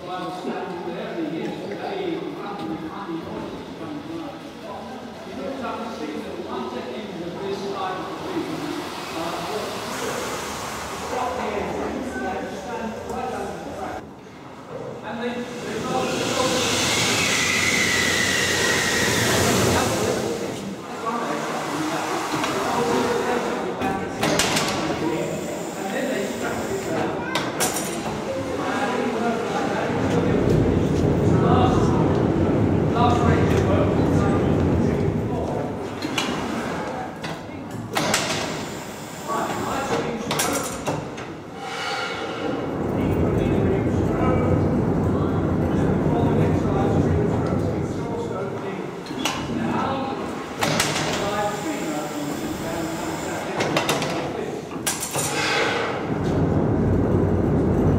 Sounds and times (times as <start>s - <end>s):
Steam: 7.9s - 12.1s, 15.4s - 23.7s, 25.1s - 27.0s, 38.0s - 39.9s, 50.6s - 53.9s.